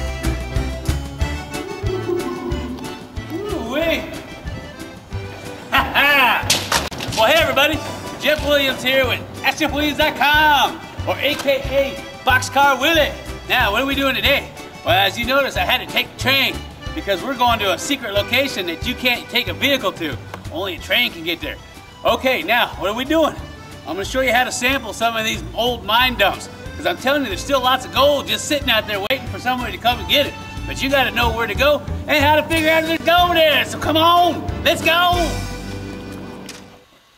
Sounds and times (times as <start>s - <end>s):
Music: 0.0s - 37.1s
Speech: 3.3s - 4.2s, 7.2s - 35.4s.